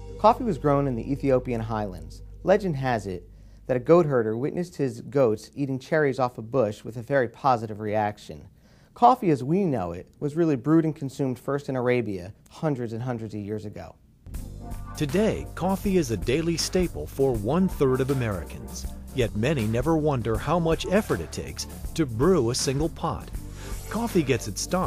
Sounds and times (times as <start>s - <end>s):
Music: 0.0s - 3.8s, 14.3s - 24.8s
Speech: 0.2s - 14.0s, 15.0s - 24.8s.